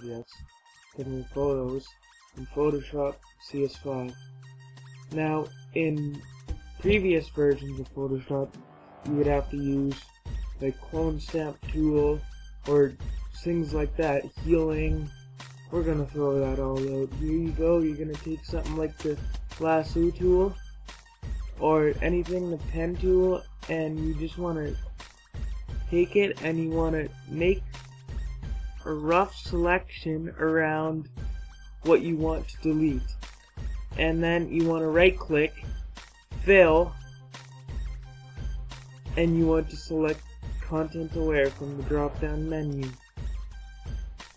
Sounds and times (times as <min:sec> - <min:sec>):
Speech: 0:00.0 - 0:00.4, 0:01.0 - 0:04.2, 0:05.1 - 0:06.2, 0:06.8 - 0:15.1, 0:15.7 - 0:20.6, 0:21.6 - 0:24.8, 0:25.9 - 0:27.6, 0:28.8 - 0:31.1, 0:31.8 - 0:33.2, 0:34.0 - 0:35.7, 0:36.4 - 0:37.0, 0:39.2 - 0:43.0
Music: 0:00.0 - 0:44.3.